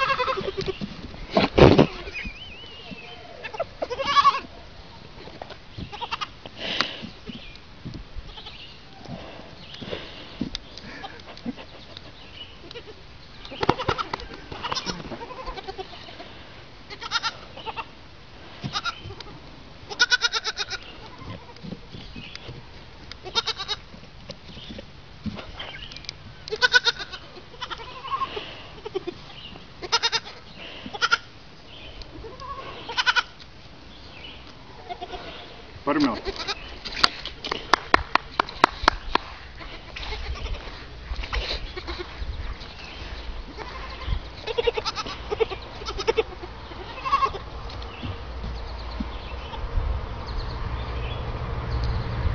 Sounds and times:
Bleat: 0.0 - 0.8, 3.0 - 4.5, 5.9 - 6.3, 8.3 - 8.6, 13.6 - 16.3, 16.9 - 17.9, 18.7 - 21.6, 23.2 - 23.9, 26.5 - 29.2, 29.8 - 31.3, 32.2 - 33.4, 34.8 - 35.4, 36.0 - 36.7, 39.6 - 40.7, 41.7 - 42.2, 43.5 - 47.5.

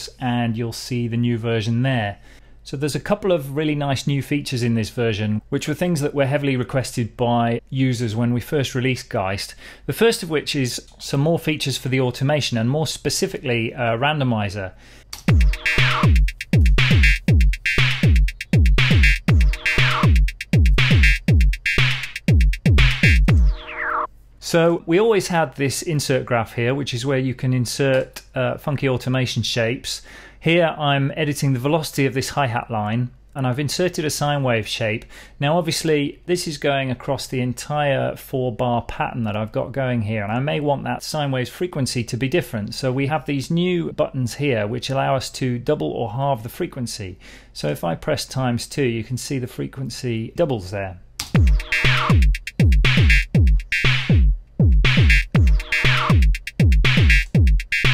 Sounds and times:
Speech: 0.0 - 14.8, 24.4 - 51.1.

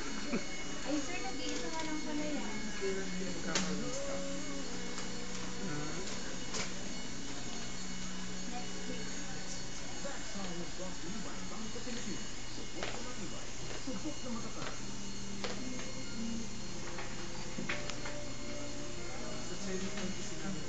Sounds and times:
Music: 0.0 - 12.0, 14.1 - 20.6
Speech: 8.5 - 14.8.

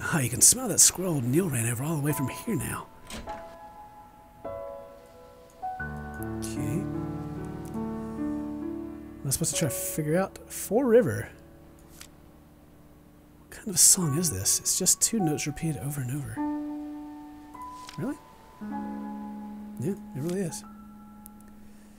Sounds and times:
Speech: 0.0 - 2.9, 6.3 - 6.9, 9.2 - 11.4, 13.5 - 16.4, 18.0 - 18.2, 19.8 - 20.6
Music: 0.0 - 21.9.

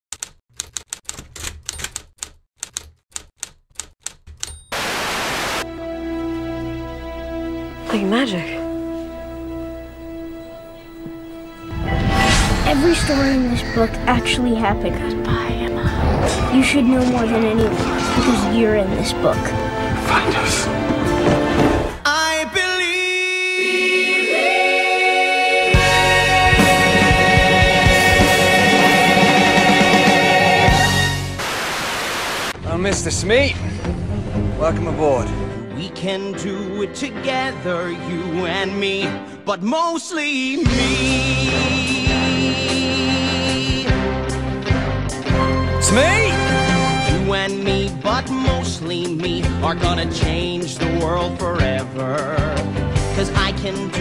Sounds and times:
Music: 5.6 - 31.5, 32.6 - 54.0.

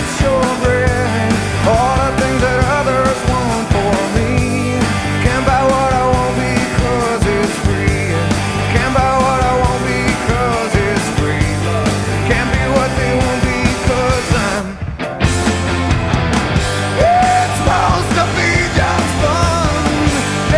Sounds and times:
Grunge: 0.0 - 20.5.

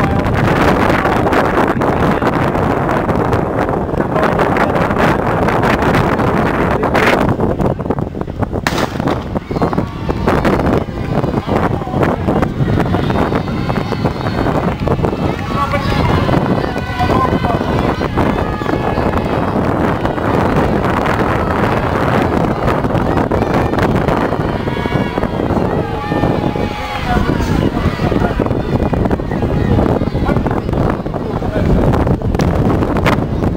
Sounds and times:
Outside, urban or manmade: 0.0 - 33.5
Speech: 15.2 - 19.1, 26.6 - 32.0.

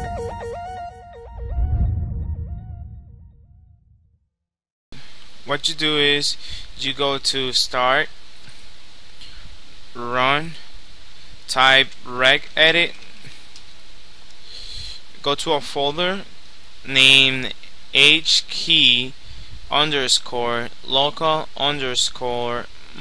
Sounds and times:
Speech: 5.4 - 8.2, 10.0 - 10.7, 11.5 - 13.0, 15.2 - 16.3, 16.9 - 23.0.

